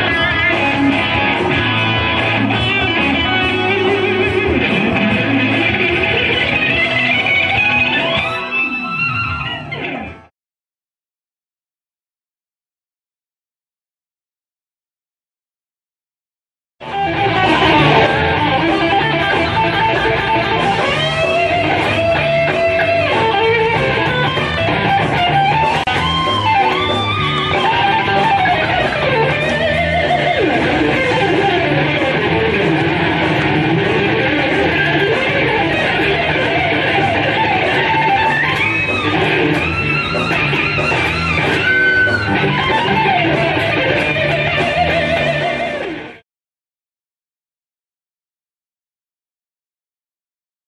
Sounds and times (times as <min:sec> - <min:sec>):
Guitar: 0:00.0 - 0:10.3, 0:16.8 - 0:46.2.